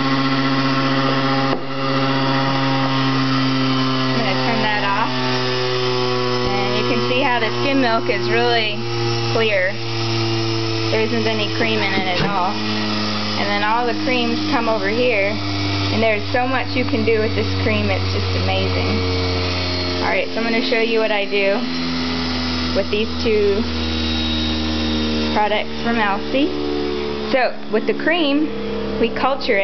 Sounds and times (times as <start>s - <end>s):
Blender: 0.0s - 29.6s
Speech: 4.2s - 5.1s, 6.5s - 8.8s, 9.4s - 9.8s, 11.0s - 12.6s, 13.4s - 15.4s, 16.0s - 19.0s, 20.0s - 21.6s, 22.8s - 23.7s, 25.4s - 26.5s, 27.4s - 29.6s.